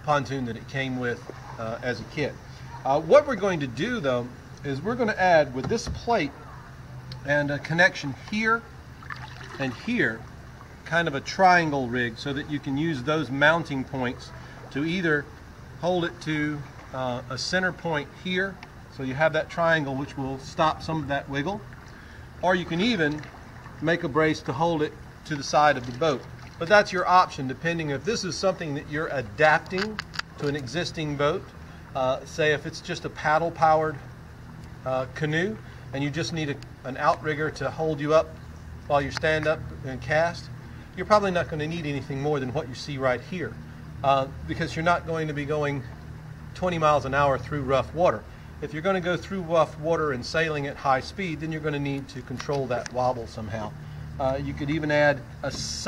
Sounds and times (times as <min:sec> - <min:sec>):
Speech: 0:00.0 - 0:06.5, 0:07.2 - 0:08.7, 0:09.6 - 0:10.2, 0:10.8 - 0:21.6, 0:22.4 - 0:23.2, 0:23.8 - 0:34.1, 0:34.8 - 0:45.9, 0:46.6 - 0:55.8.